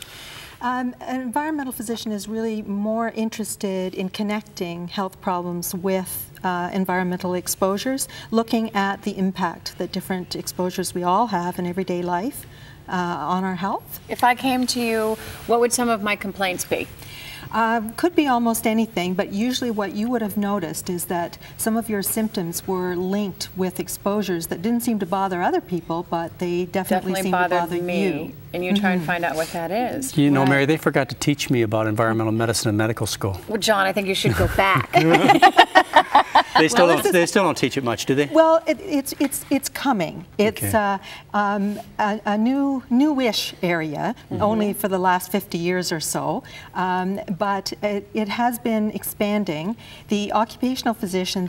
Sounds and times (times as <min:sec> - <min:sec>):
Conversation: 0:00.6 - 0:51.4.